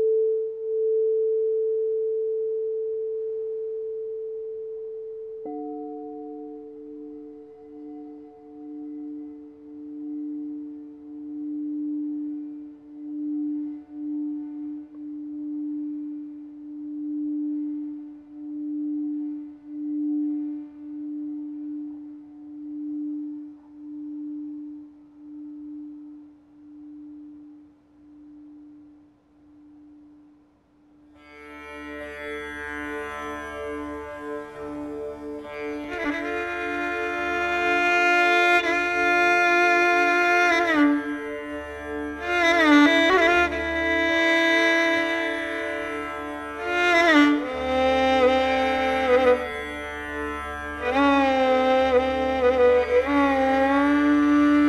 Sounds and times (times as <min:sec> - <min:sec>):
Music: 0:00.0 - 0:54.6.